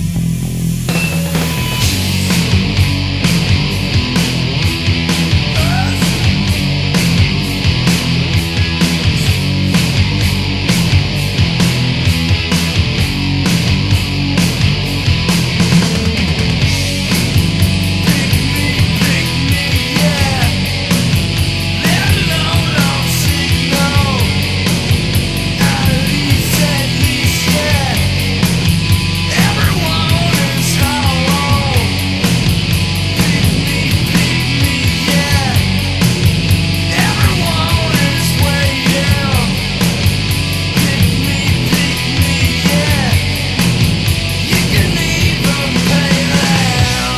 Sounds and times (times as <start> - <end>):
Music: 0.0 - 47.1.